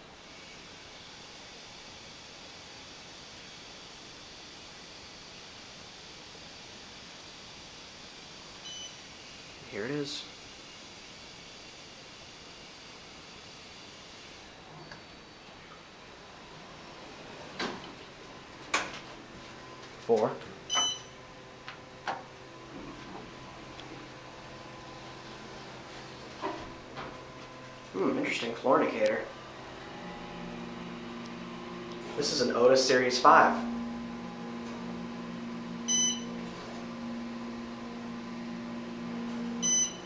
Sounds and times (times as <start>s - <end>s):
Speech: 9.6s - 10.3s, 20.0s - 20.5s, 28.0s - 29.3s, 32.1s - 33.7s
Drawer open or close: 17.0s - 18.0s.